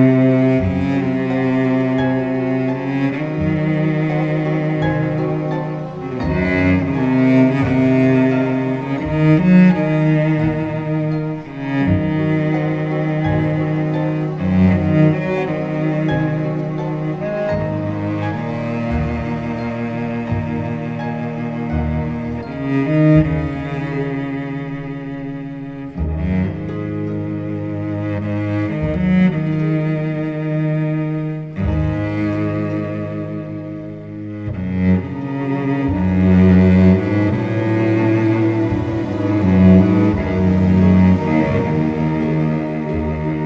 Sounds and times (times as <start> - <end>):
Music: 0.0 - 43.4.